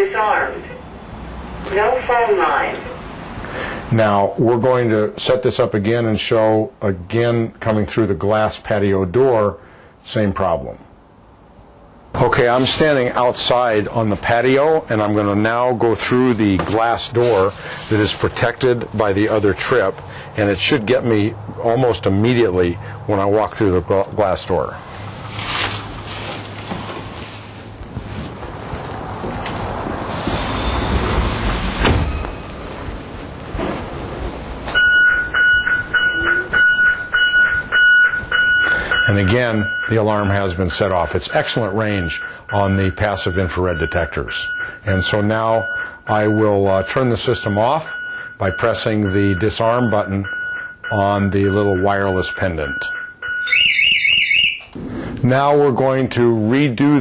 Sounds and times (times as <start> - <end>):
Speech: 0.0 - 0.8, 1.7 - 3.0, 3.9 - 10.9, 12.2 - 24.8, 39.1 - 50.3, 50.9 - 53.0, 55.2 - 57.0
Alarm: 34.7 - 54.7.